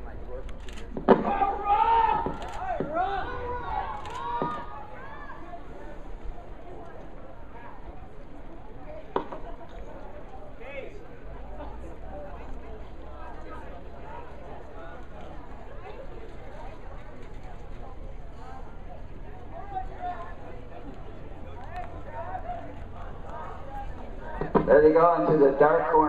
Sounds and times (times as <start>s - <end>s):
Outside, urban or manmade: 0.0s - 26.0s.